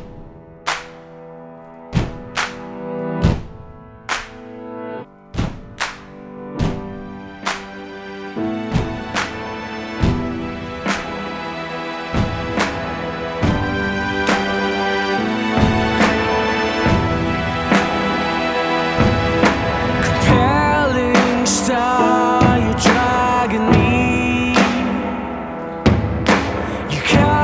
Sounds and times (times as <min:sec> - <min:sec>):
Music: 0:00.0 - 0:27.4.